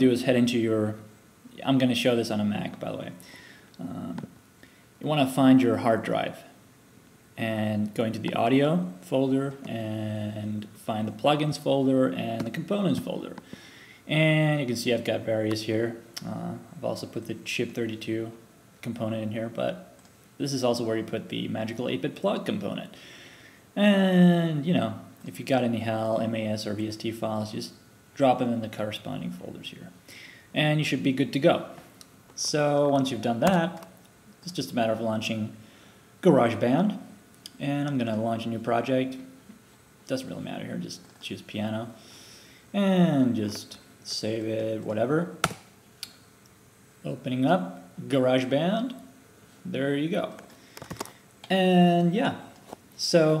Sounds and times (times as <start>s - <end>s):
Speech: 0.0s - 3.2s, 3.8s - 4.3s, 5.0s - 6.6s, 7.4s - 13.4s, 14.1s - 23.0s, 23.8s - 31.8s, 32.4s - 35.6s, 36.2s - 39.4s, 40.1s - 42.0s, 42.7s - 45.4s, 47.0s - 50.5s, 51.4s - 53.4s.